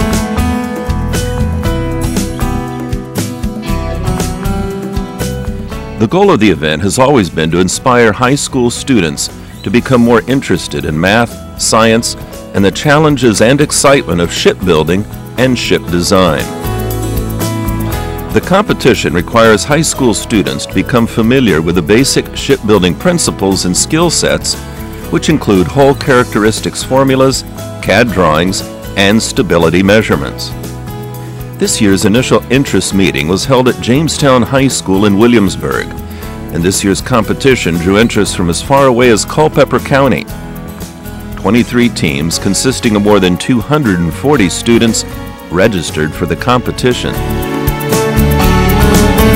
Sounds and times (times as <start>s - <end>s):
Music: 0.0s - 49.3s
Speech: 6.0s - 16.5s, 18.3s - 30.6s, 31.6s - 40.3s, 41.4s - 47.2s.